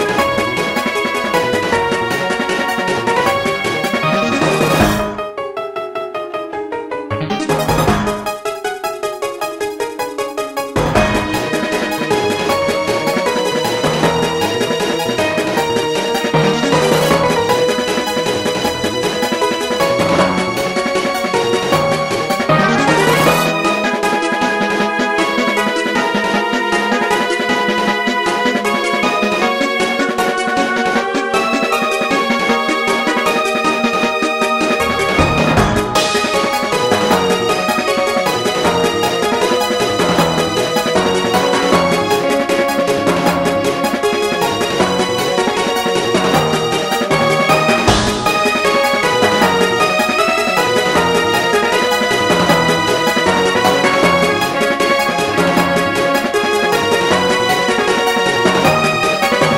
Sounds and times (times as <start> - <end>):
Music: 0.0 - 59.5.